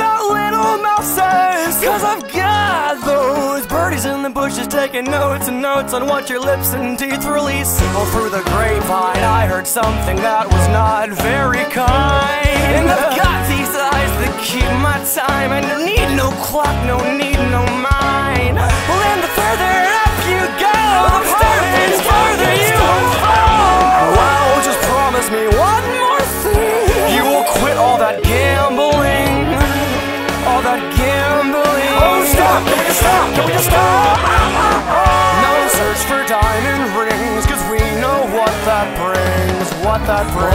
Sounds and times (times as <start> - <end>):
Music: 0.0 - 40.5.